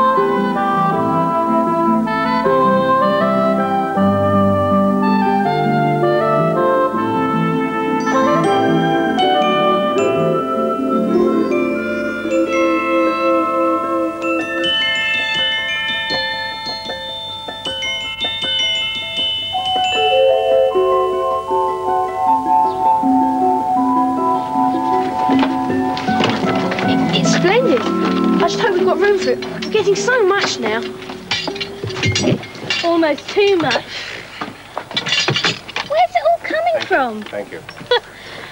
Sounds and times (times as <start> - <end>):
Glockenspiel: 7.9 - 34.1
Marimba, xylophone: 8.0 - 34.1.